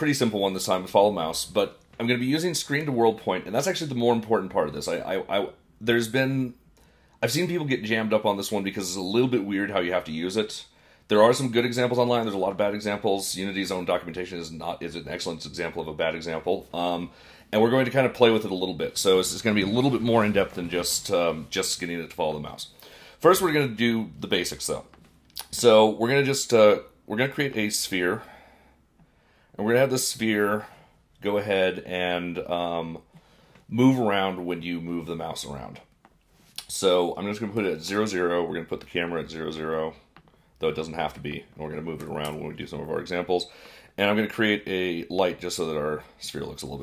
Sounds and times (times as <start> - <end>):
Speech: 0.0 - 6.6, 7.2 - 28.3, 29.6 - 33.1, 33.7 - 35.9, 36.6 - 46.8.